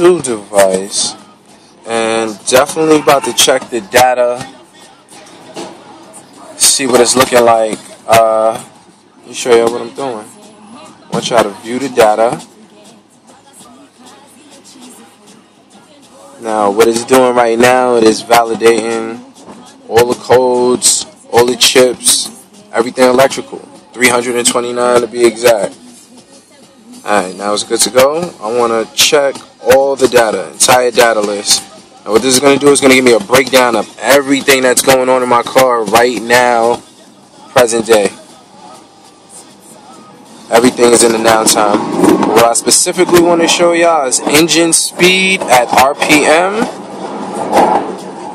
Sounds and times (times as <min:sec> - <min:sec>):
Speech: 0:00.0 - 0:04.6, 0:06.4 - 0:12.5, 0:16.4 - 0:19.2, 0:19.9 - 0:26.2, 0:27.0 - 0:36.8, 0:37.5 - 0:38.8, 0:40.5 - 0:46.7
Music: 0:00.0 - 0:48.3.